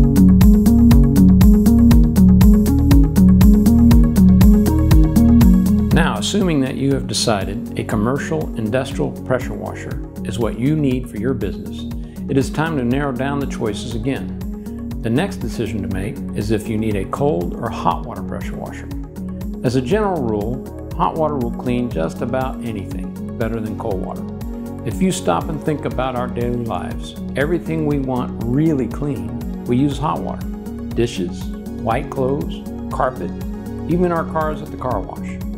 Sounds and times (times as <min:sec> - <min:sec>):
Music: 0:00.0 - 0:35.5
Speech: 0:06.0 - 0:14.3, 0:15.0 - 0:18.9, 0:19.6 - 0:24.2, 0:24.9 - 0:35.4.